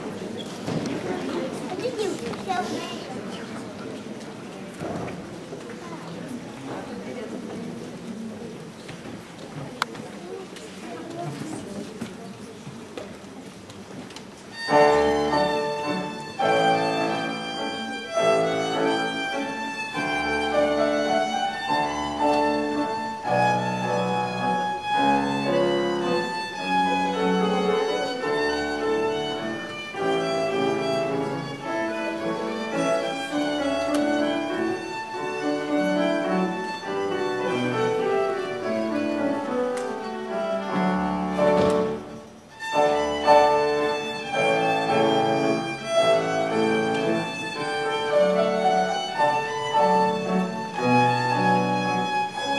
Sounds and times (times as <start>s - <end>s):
Speech: 0.1s - 14.1s, 26.1s - 29.7s
Violin, fiddle: 14.5s - 52.5s.